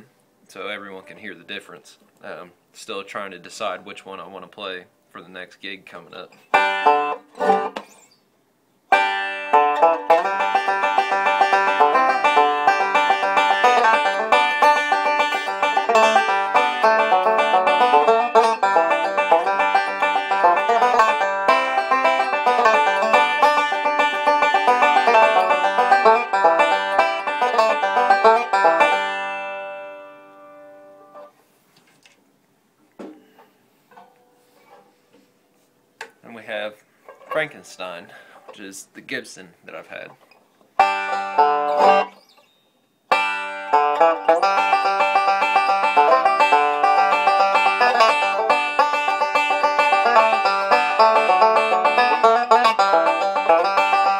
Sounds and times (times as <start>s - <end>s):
Speech: 0.0s - 6.4s, 36.2s - 40.2s
Banjo: 6.4s - 8.1s, 8.9s - 31.4s, 37.0s - 38.7s, 40.1s - 42.2s, 43.1s - 54.1s.